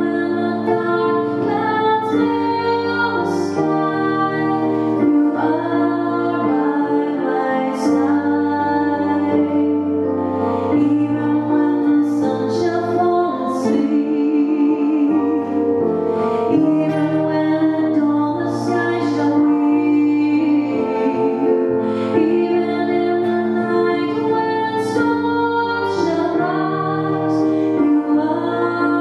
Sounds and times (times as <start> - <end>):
Vocal music: 0.0 - 29.0
Singing: 16.4 - 29.0.